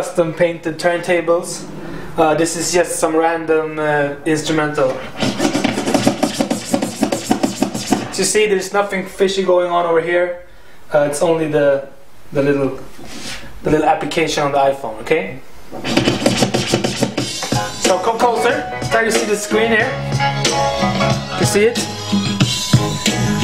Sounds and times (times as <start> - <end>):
Speech: 0.0 - 5.1, 8.2 - 12.9, 13.6 - 15.5, 17.9 - 20.0, 21.4 - 21.9
Scratching (performance technique): 4.5 - 8.4, 15.7 - 23.4.